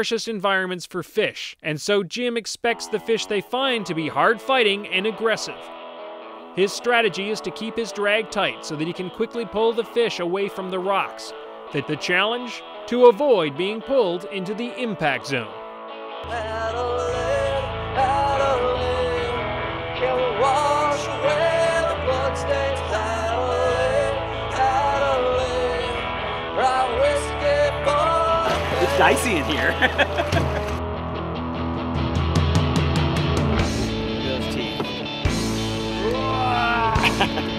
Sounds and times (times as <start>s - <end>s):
Speech: 0.0s - 5.6s, 6.6s - 15.6s, 28.7s - 29.8s, 34.2s - 34.9s
Music: 2.7s - 37.5s.